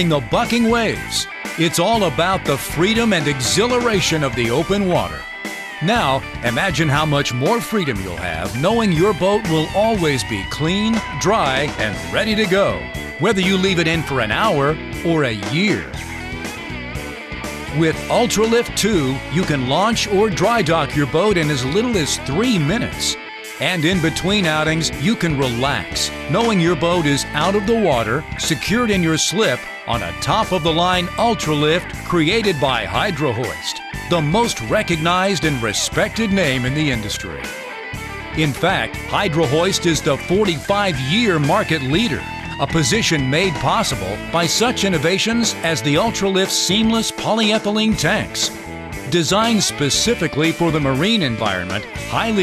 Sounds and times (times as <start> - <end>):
Speech: 0.0 - 5.2, 5.8 - 16.0, 17.7 - 37.5, 38.4 - 48.5, 49.1 - 52.4
Music: 0.0 - 52.4.